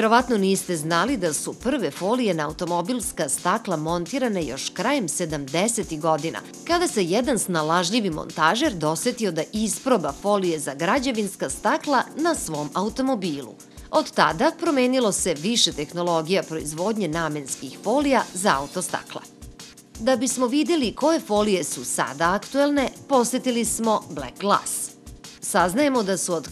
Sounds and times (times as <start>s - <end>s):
Speech: 0.0s - 19.3s, 20.0s - 26.5s
Music: 0.0s - 26.5s.